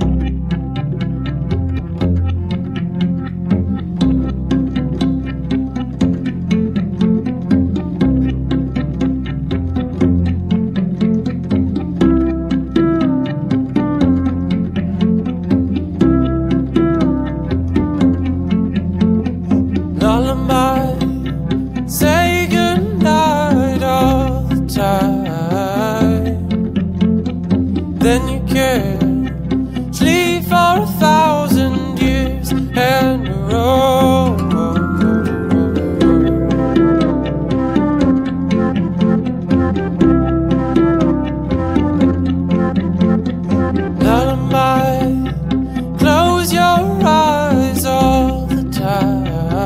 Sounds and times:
Music: 0.0 - 49.6.

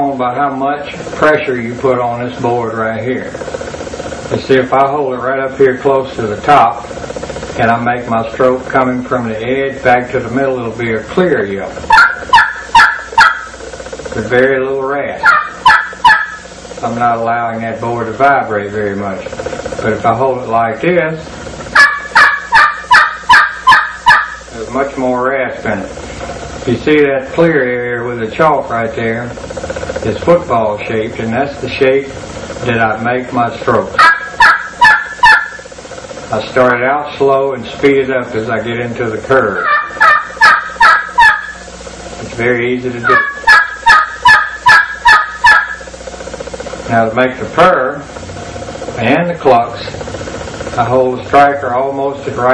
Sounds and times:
Speech: 0.0 - 3.4, 4.3 - 6.9, 7.6 - 11.8, 14.2 - 15.3, 16.8 - 21.3, 24.5 - 26.0, 26.7 - 29.4, 30.0 - 34.0, 36.3 - 39.6, 42.2 - 43.4, 46.9 - 48.1, 49.0 - 50.0, 50.8 - 52.5.

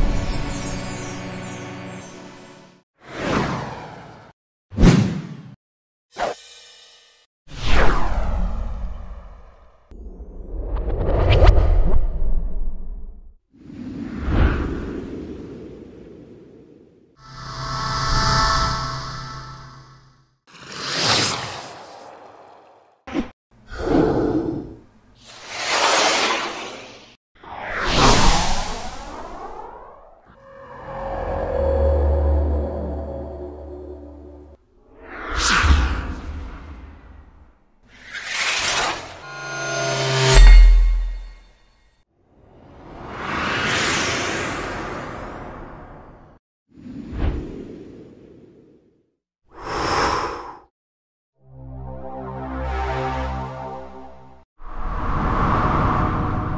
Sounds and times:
Whoosh, swoosh, swish: 25.2 - 30.2, 37.9 - 39.4, 42.8 - 45.7.

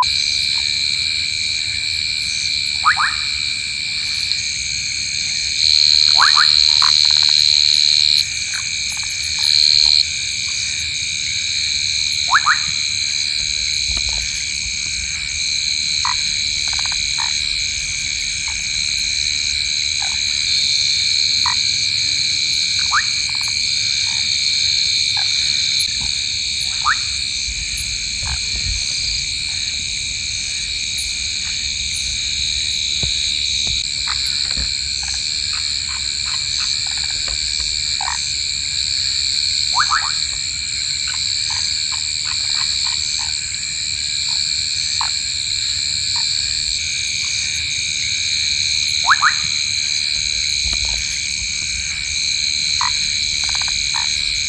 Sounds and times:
Frog: 0.0 - 54.4.

